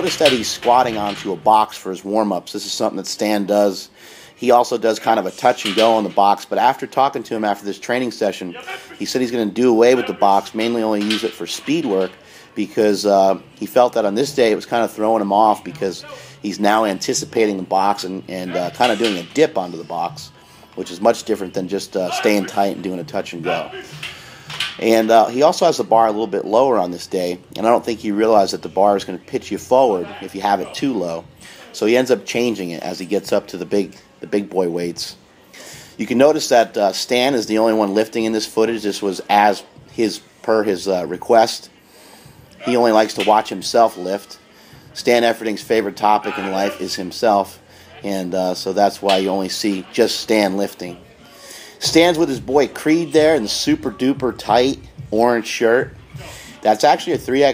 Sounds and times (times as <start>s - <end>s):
Speech: 0.0s - 23.9s, 24.8s - 31.2s, 42.6s - 44.4s, 45.0s - 51.1s, 51.8s - 56.0s, 56.6s - 57.5s.